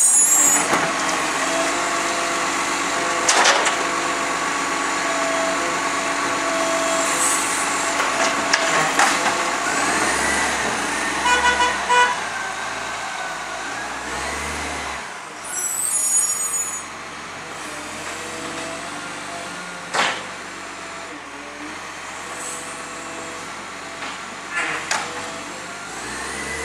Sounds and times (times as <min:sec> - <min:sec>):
Truck: 0:00.0 - 0:26.6
Vehicle horn, car horn, honking: 0:11.2 - 0:12.2.